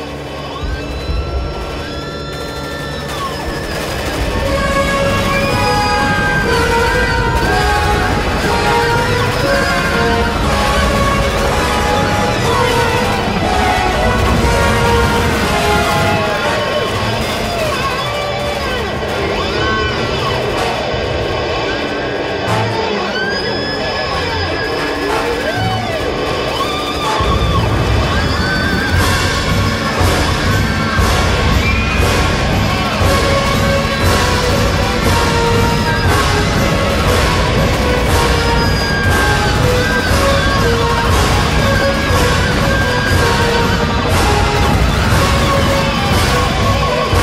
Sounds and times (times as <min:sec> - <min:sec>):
Music: 0:00.0 - 0:47.2.